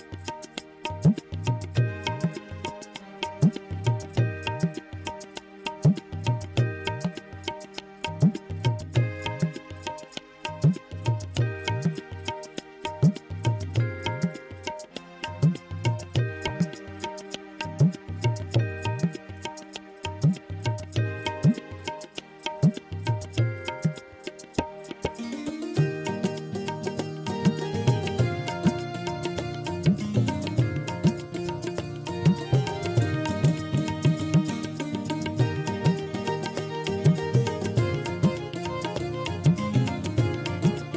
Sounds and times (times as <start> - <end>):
Music: 0.0 - 40.9.